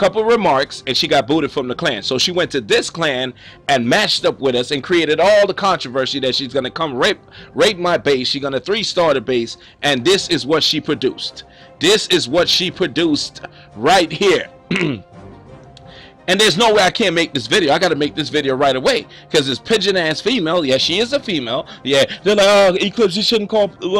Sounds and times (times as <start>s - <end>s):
Speech: 0.0s - 14.5s, 16.3s - 24.0s
Music: 0.0s - 24.0s.